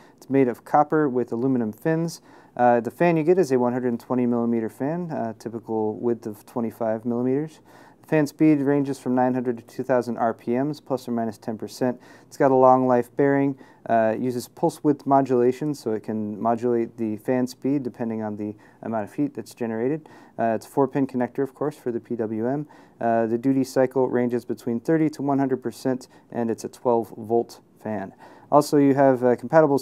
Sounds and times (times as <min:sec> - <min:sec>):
Speech: 0:00.2 - 0:29.8.